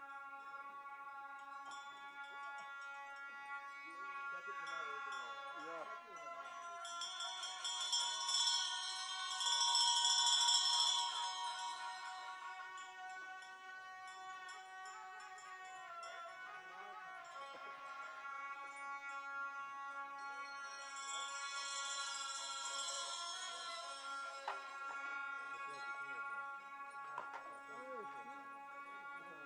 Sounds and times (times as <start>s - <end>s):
Music: 0.0s - 29.4s
Speech: 3.8s - 7.8s, 23.7s - 26.5s, 27.2s - 29.4s.